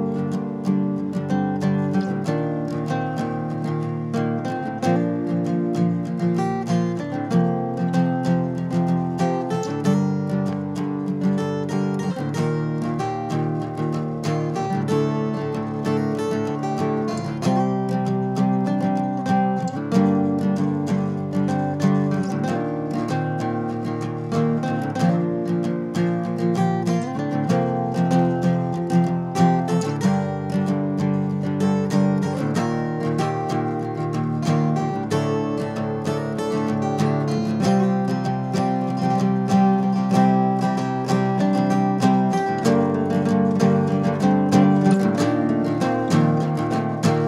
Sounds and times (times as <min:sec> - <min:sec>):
Acoustic guitar: 0:00.0 - 0:47.2.